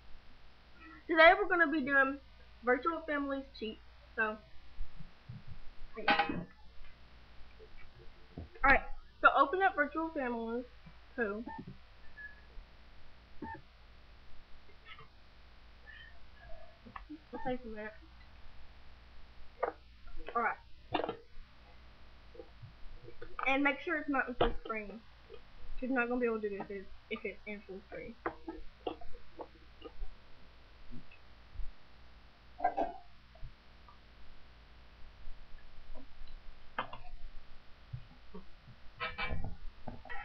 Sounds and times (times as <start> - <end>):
Speech: 1.1 - 4.4, 8.7 - 11.5, 17.2 - 18.0, 20.3 - 20.6, 23.4 - 25.0, 25.8 - 28.2.